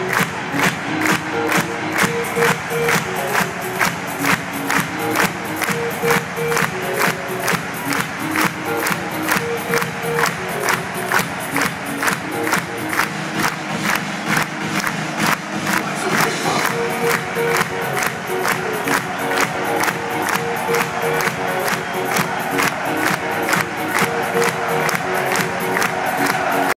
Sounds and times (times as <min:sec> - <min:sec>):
Techno: 0:00.0 - 0:26.7.